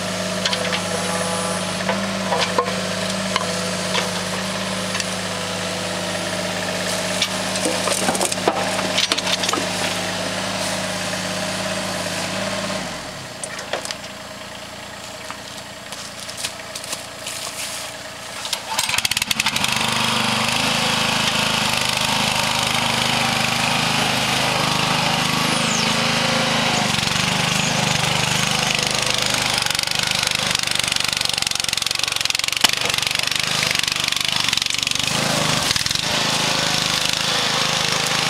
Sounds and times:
Vehicle: 0.0s - 38.2s.

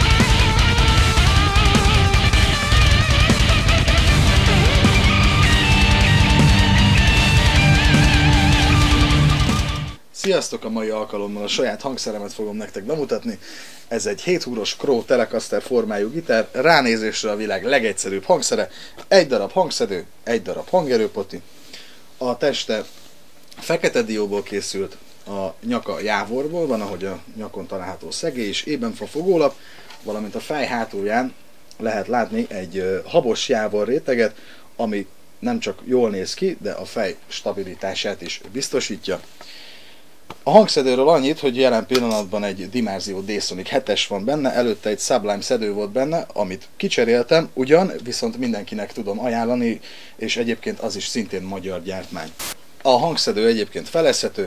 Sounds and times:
Speech: 10.2s - 21.4s, 22.2s - 23.0s, 23.6s - 39.3s, 40.4s - 54.4s.

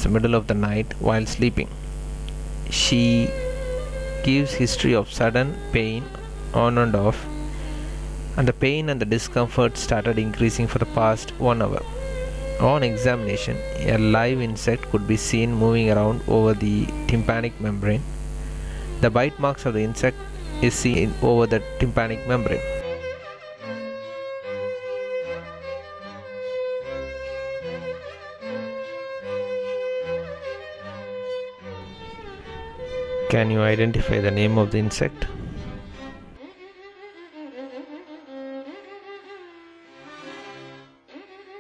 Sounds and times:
Music: 2.2s - 41.6s.

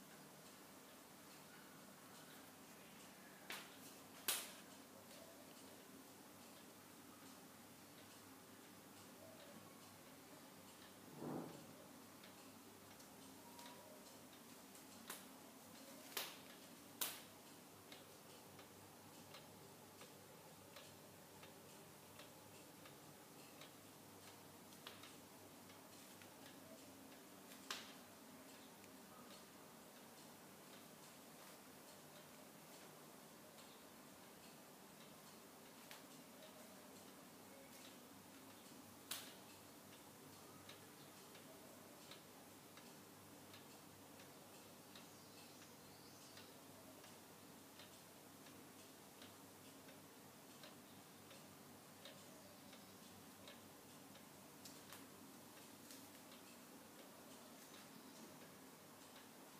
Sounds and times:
Tick-tock: 0.0s - 59.5s.

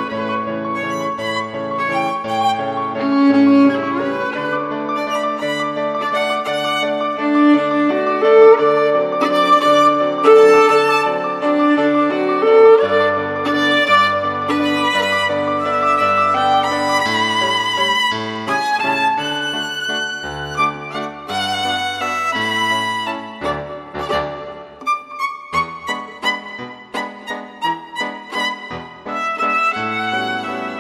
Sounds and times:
Music: 0.0s - 30.8s.

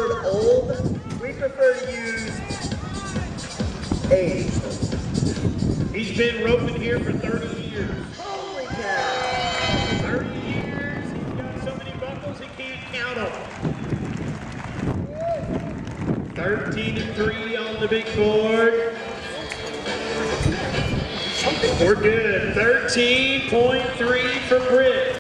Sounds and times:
Music: 0.0s - 10.3s, 17.0s - 24.8s
Clip-clop: 11.0s - 18.2s.

